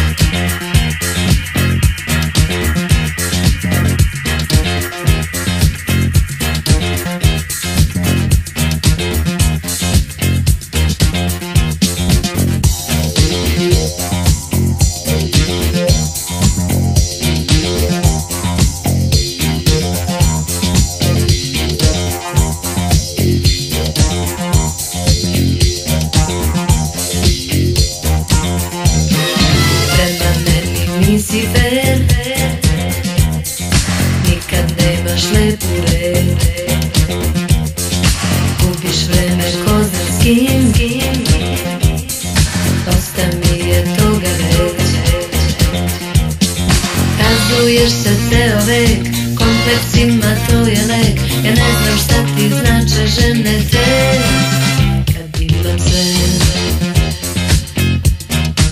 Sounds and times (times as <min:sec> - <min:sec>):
Funk: 0:00.0 - 0:58.7.